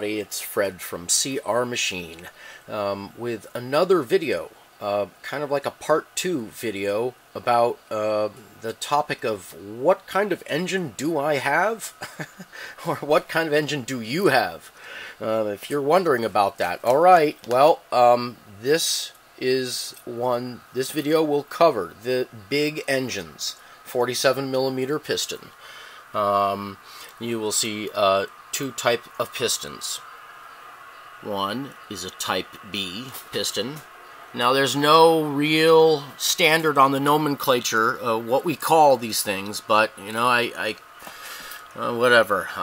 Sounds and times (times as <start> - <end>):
Speech: 0.0 - 25.6, 26.2 - 30.0, 31.2 - 40.8, 41.8 - 42.6.